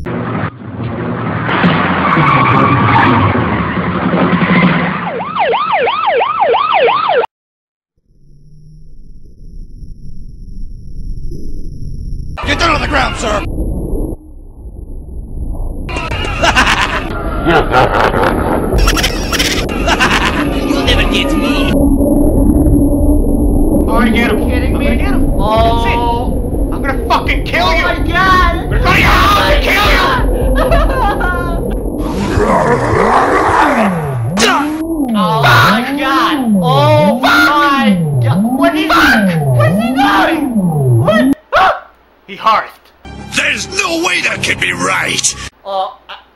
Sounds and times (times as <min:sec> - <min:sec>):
Speech: 0:12.4 - 0:13.5, 0:23.9 - 0:30.2, 0:34.4 - 0:41.4, 0:43.4 - 0:46.1.